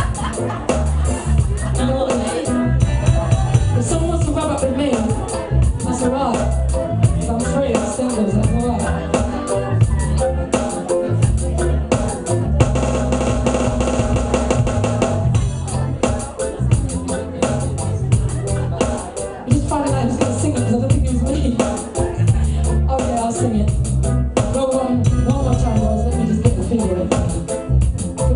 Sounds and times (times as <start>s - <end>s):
Music: 0.0s - 28.3s
Speech: 1.5s - 12.0s, 15.4s - 23.8s, 24.4s - 27.6s.